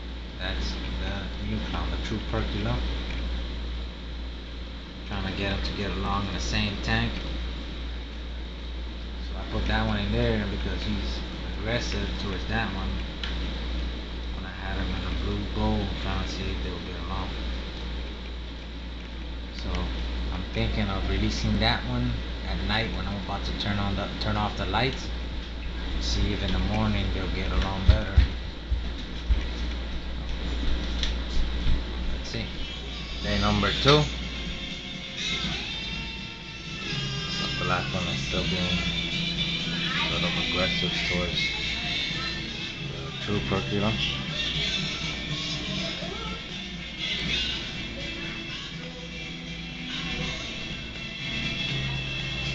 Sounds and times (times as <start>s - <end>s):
Speech: 0.4s - 2.9s, 5.1s - 7.2s, 9.3s - 13.1s, 14.4s - 17.4s, 19.6s - 25.2s, 26.0s - 28.4s, 33.2s - 34.2s, 37.4s - 38.9s, 39.9s - 41.5s, 42.9s - 44.1s
Music: 30.4s - 52.5s.